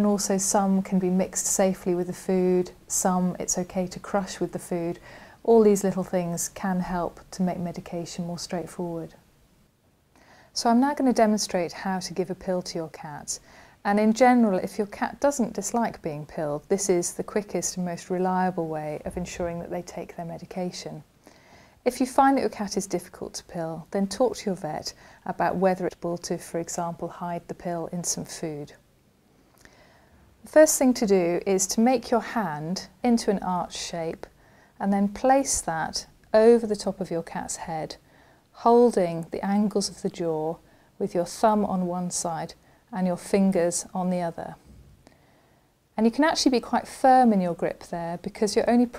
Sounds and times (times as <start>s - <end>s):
Speech: 0.0s - 9.2s, 10.6s - 21.1s, 21.8s - 28.8s, 30.4s - 38.0s, 38.6s - 44.6s, 46.0s - 48.9s.